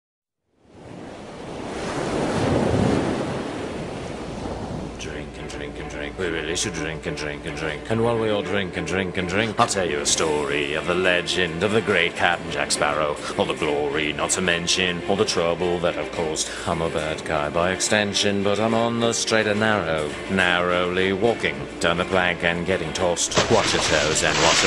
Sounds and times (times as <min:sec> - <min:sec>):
Ocean: 0:00.5 - 0:06.8, 0:07.8 - 0:24.6
Music: 0:05.0 - 0:24.6
Speech: 0:05.0 - 0:24.6.